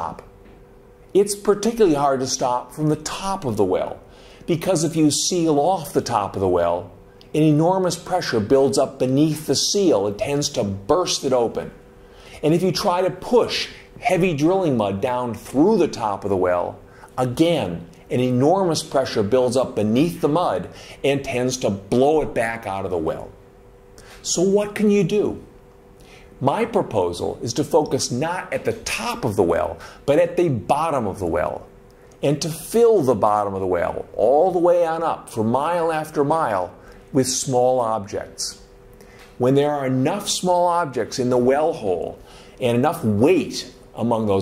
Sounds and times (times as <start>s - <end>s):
Speech: 0.0s - 0.3s, 1.2s - 11.8s, 12.4s - 23.4s, 24.2s - 25.5s, 26.4s - 38.7s, 39.4s - 44.4s.